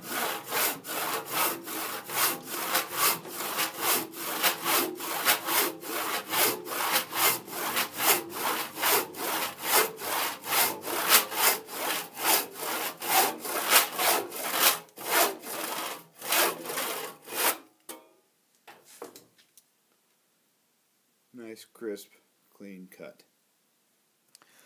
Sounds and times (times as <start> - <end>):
Sawing: 0.0 - 17.6
Wood: 0.1 - 17.6.